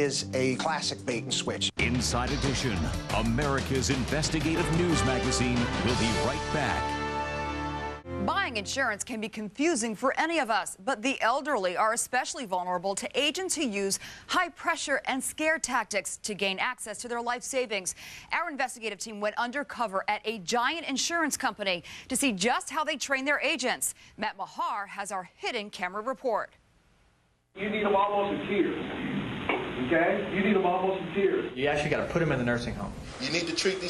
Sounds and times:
Speech: 0.0 - 6.8, 27.6 - 28.8.

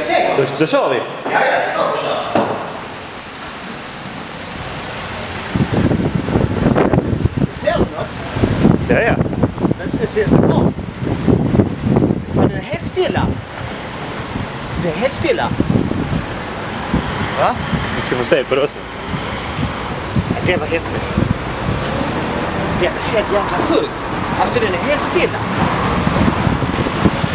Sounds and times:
Speech: 14.8 - 15.6, 20.4 - 21.2, 22.8 - 25.5.

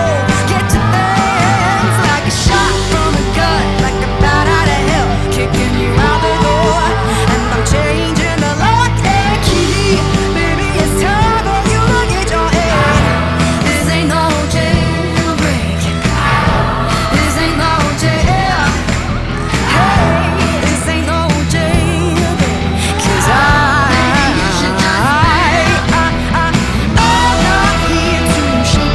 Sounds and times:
Independent music: 0.0 - 28.9.

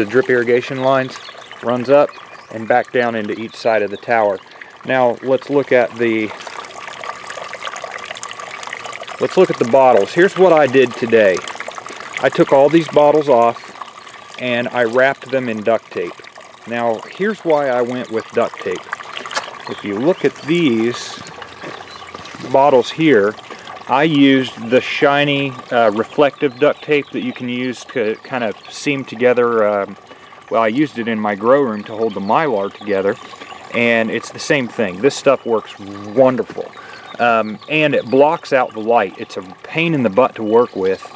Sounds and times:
Speech: 0.0 - 6.4, 9.2 - 11.4, 12.2 - 13.6, 14.4 - 18.8, 19.7 - 21.2, 22.4 - 41.1
Outside, urban or manmade: 0.0 - 41.1.

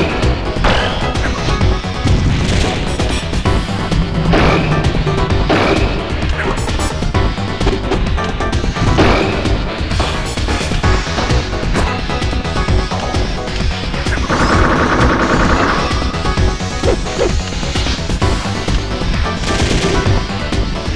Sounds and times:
Music: 0.0 - 20.9.

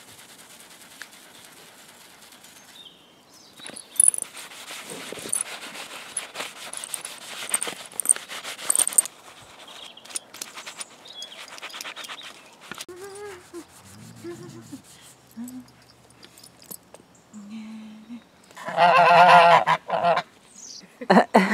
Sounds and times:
Outside, rural or natural: 0.0 - 21.5
Animal: 11.2 - 16.1.

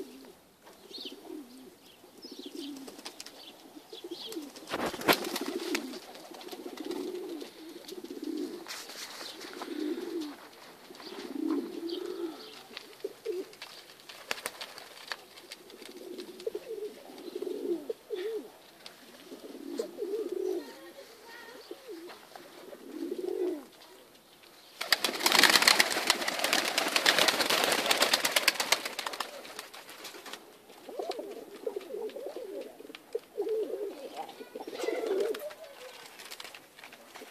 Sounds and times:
Outside, rural or natural: 0.0 - 16.4
Pigeon, dove: 0.0 - 37.3
Speech: 20.4 - 22.4, 23.6 - 24.2, 34.0 - 36.2.

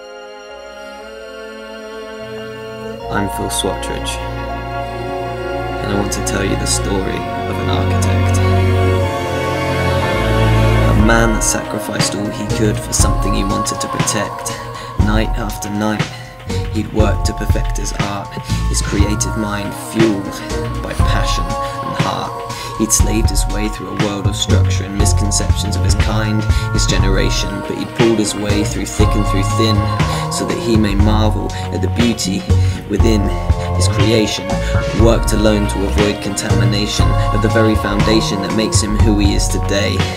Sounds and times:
Music: 0.0 - 40.1
Speech: 3.0 - 4.2, 5.8 - 8.6, 10.9 - 40.1.

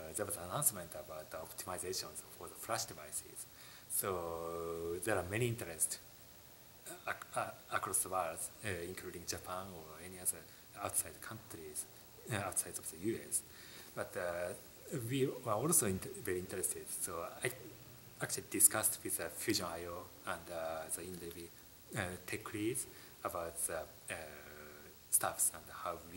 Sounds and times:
Speech: 0.0 - 6.0, 6.9 - 26.1
Inside, small room: 0.0 - 26.1.

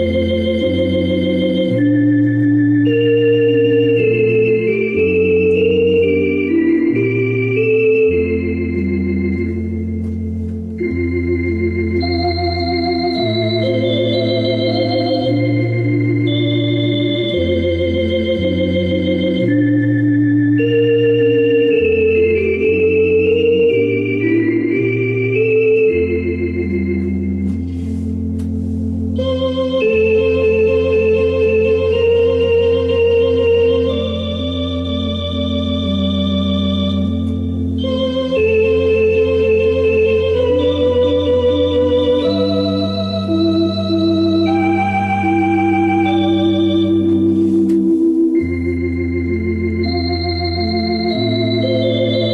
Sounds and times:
Hammond organ: 0.0 - 52.3.

